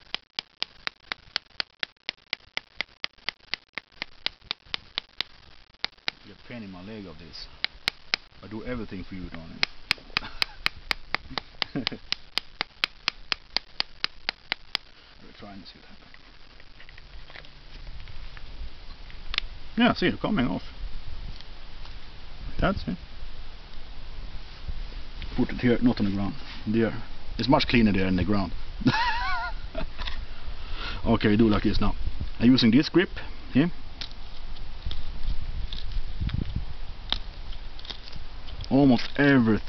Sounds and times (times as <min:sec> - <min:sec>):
Speech: 0:06.2 - 0:07.5, 0:08.4 - 0:09.6, 0:15.2 - 0:16.0, 0:19.8 - 0:20.7, 0:22.5 - 0:23.0, 0:25.4 - 0:28.6, 0:31.0 - 0:33.8, 0:38.7 - 0:39.6.